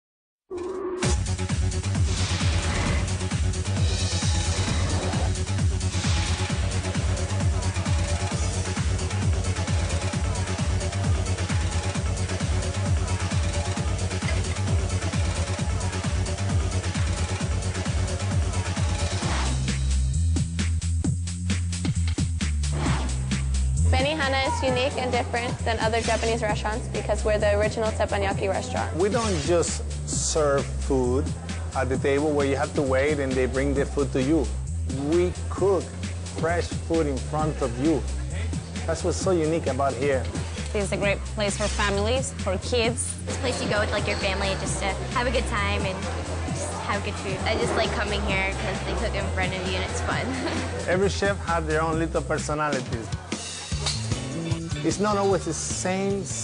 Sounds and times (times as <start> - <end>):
Music: 0.5 - 56.4
Inside, public space: 3.6 - 20.6, 23.9 - 56.4.